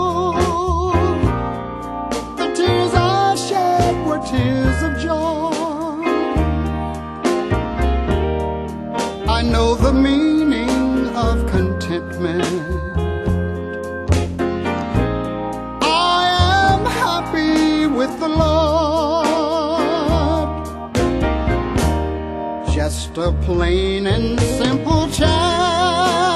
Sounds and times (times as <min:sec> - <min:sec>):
Music: 0:00.0 - 0:26.3.